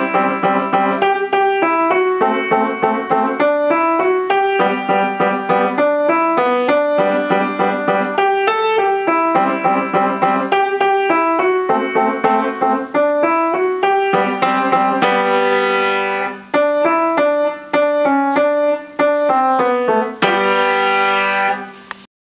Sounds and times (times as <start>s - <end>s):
Music: 0.0s - 22.0s.